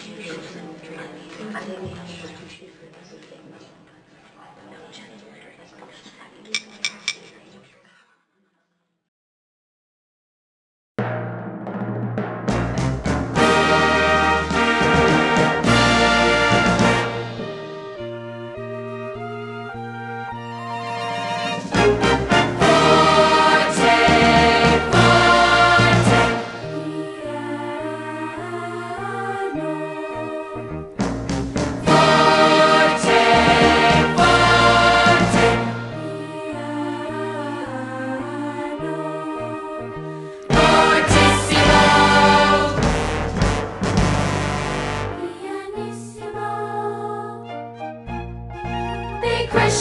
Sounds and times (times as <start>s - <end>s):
Inside, large room or hall: 0.0s - 8.9s
Speech: 0.0s - 9.0s
Music: 11.0s - 49.8s.